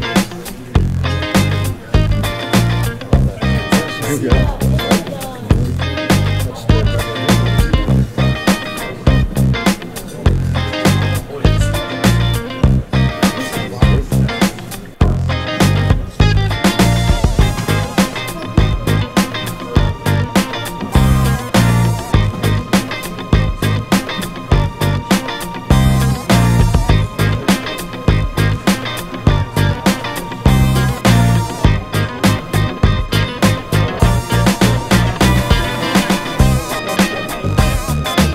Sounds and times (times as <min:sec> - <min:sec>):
Music: 0:00.0 - 0:38.3
Speech: 0:00.0 - 0:38.3.